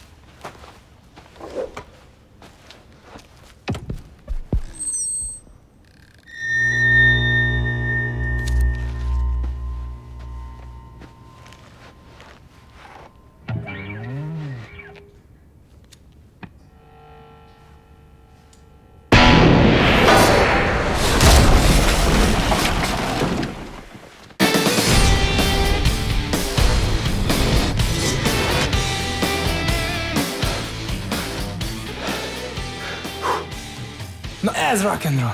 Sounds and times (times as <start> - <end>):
Music: 24.4 - 35.3.